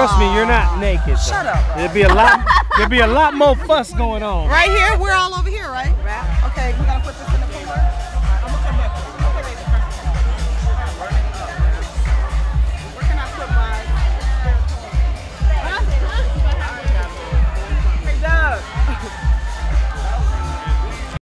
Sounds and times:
House music: 0:00.0 - 0:21.2.

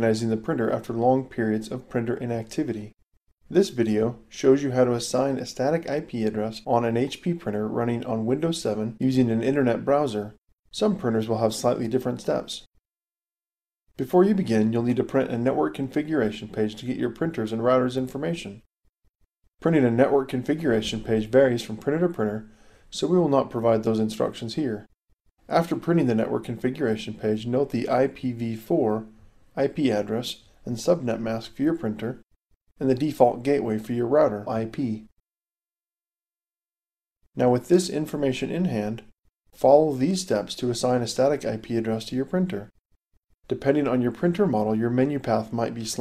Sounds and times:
Speech: 0:00.0 - 0:12.7, 0:14.0 - 0:18.7, 0:19.6 - 0:24.9, 0:25.5 - 0:32.2, 0:32.8 - 0:35.1, 0:37.4 - 0:42.8, 0:43.5 - 0:46.0.

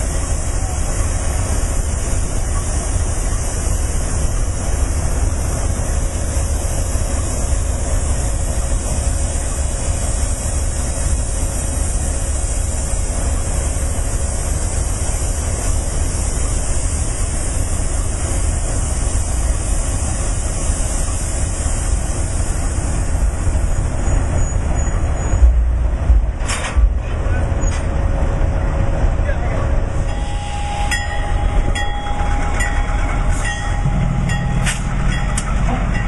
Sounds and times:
Hiss: 0:00.0 - 0:25.3.

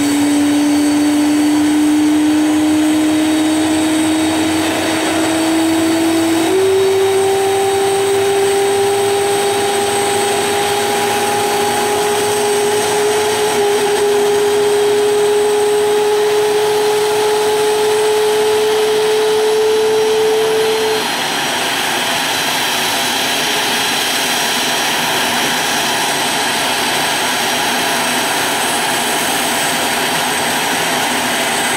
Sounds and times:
Accelerating, revving, vroom: 0:00.0 - 0:21.0
Heavy engine (low frequency): 0:00.0 - 0:31.7.

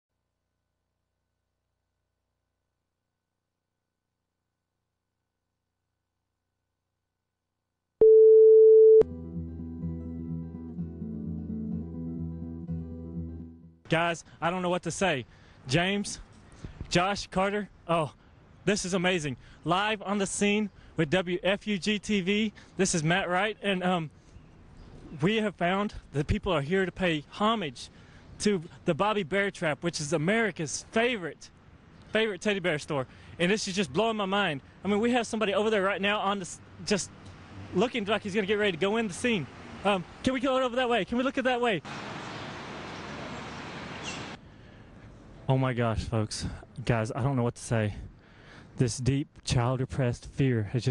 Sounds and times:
Music: 0:09.0 - 0:13.8.

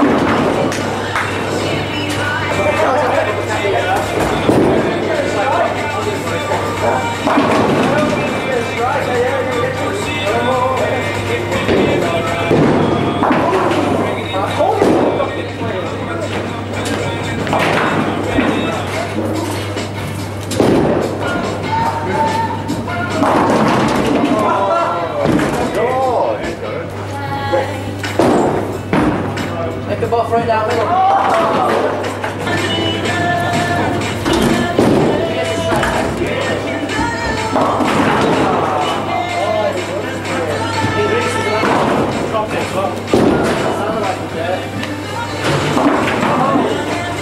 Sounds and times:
Inside, public space: 0:00.0 - 0:47.2
Music: 0:00.0 - 0:47.2.

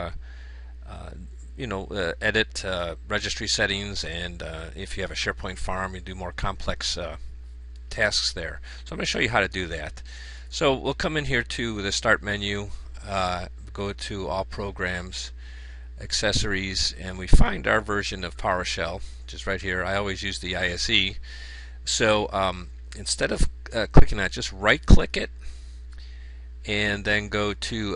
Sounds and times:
Speech: 0:00.0 - 0:00.2, 0:00.9 - 0:07.2, 0:07.9 - 0:15.4, 0:16.0 - 0:21.2, 0:21.8 - 0:25.4, 0:26.7 - 0:27.9.

